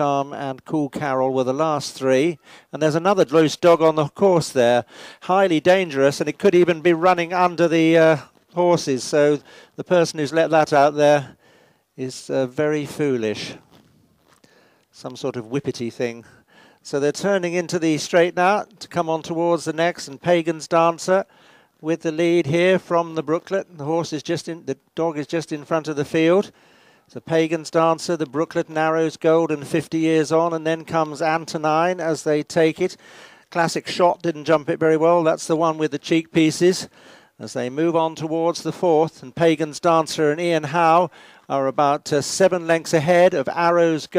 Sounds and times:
Speech: 0.0s - 11.4s, 12.0s - 13.6s, 15.0s - 44.1s.

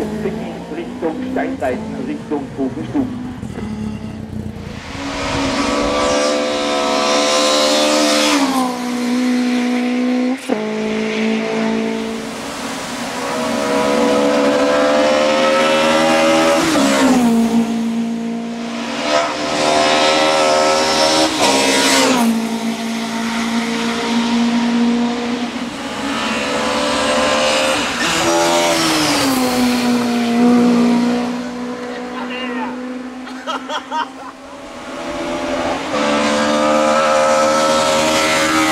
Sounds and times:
Race car, auto racing: 0.0s - 38.7s
Tire squeal: 3.4s - 6.2s.

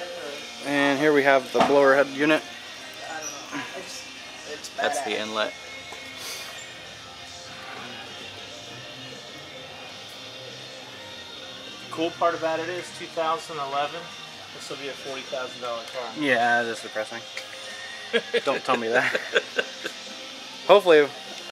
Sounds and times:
Music: 0.0s - 21.5s.

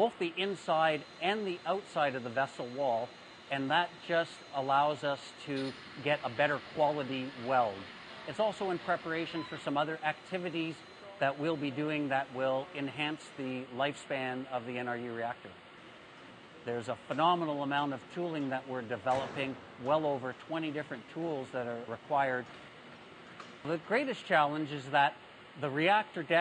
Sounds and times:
Speech: 0.0s - 15.6s, 16.7s - 22.5s, 23.7s - 26.4s.

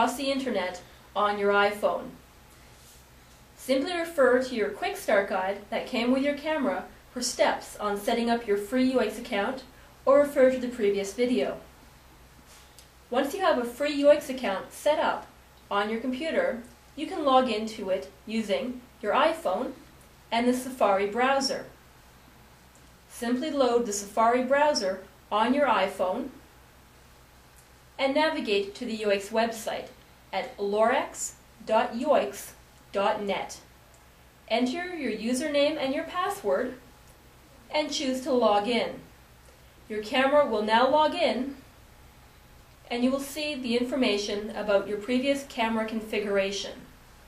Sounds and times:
Speech: 0.0s - 2.2s, 3.6s - 11.7s, 13.1s - 21.7s, 23.1s - 26.4s, 28.0s - 33.7s, 34.5s - 36.8s, 37.7s - 39.1s, 39.9s - 41.6s, 42.9s - 46.9s.

